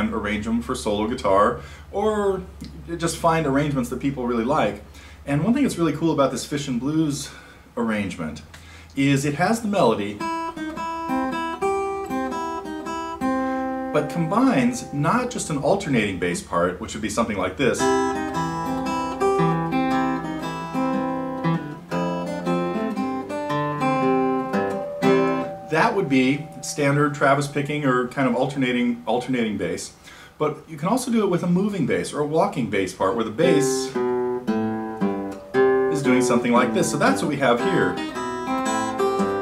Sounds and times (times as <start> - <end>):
Speech: 0.0 - 10.2, 14.0 - 18.0, 25.7 - 34.0, 35.9 - 38.0
Strum: 10.4 - 16.5, 17.7 - 30.2, 33.3 - 39.4.